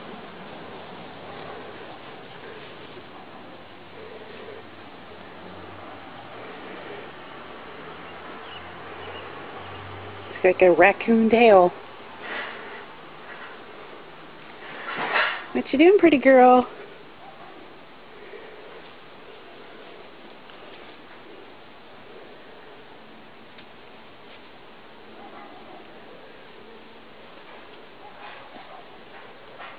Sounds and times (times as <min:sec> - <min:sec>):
Outside, urban or manmade: 0:00.0 - 0:29.7
Speech: 0:10.4 - 0:11.8, 0:15.5 - 0:16.8.